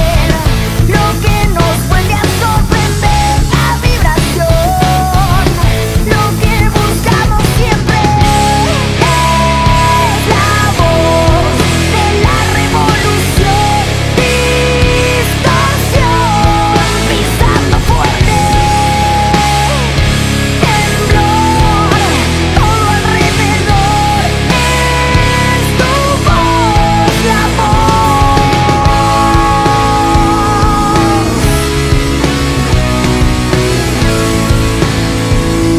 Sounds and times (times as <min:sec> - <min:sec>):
Music: 0:00.0 - 0:35.7.